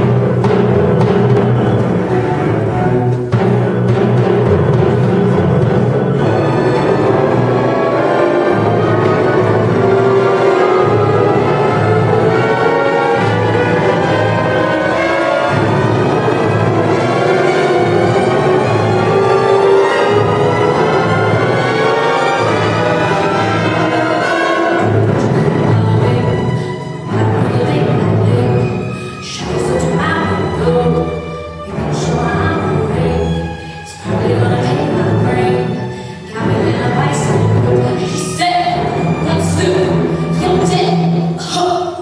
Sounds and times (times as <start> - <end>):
Orchestra: 0.0 - 42.0.